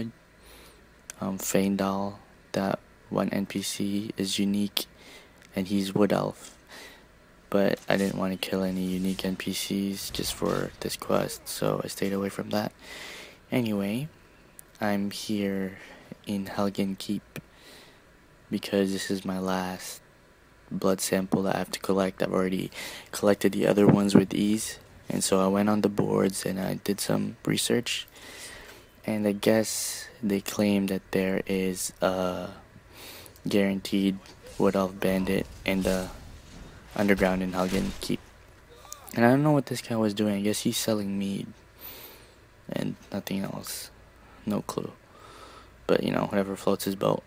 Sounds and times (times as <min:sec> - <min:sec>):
Speech: 0:01.1 - 0:04.9, 0:05.5 - 0:06.6, 0:07.5 - 0:12.8, 0:13.5 - 0:14.2, 0:14.8 - 0:17.4, 0:18.5 - 0:20.0, 0:20.7 - 0:28.1, 0:29.0 - 0:32.6, 0:33.4 - 0:41.6, 0:42.7 - 0:45.0, 0:45.9 - 0:47.2.